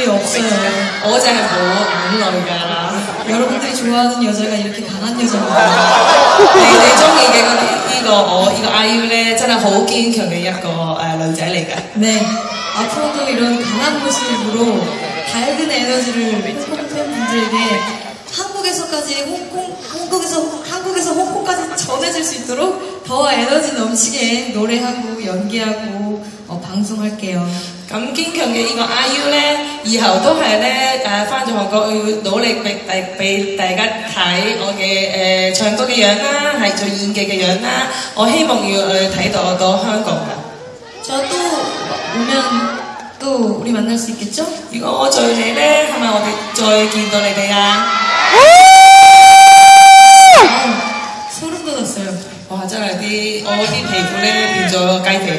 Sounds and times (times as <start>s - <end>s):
Inside, large room or hall: 0.0s - 55.3s.